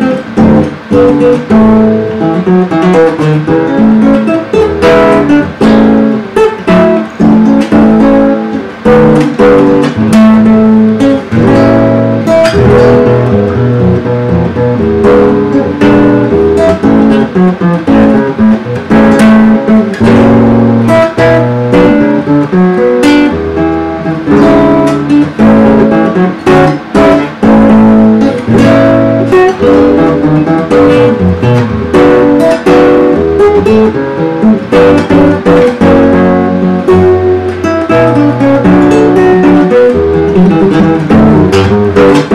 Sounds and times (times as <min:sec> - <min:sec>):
Guitar: 0:00.0 - 0:42.3.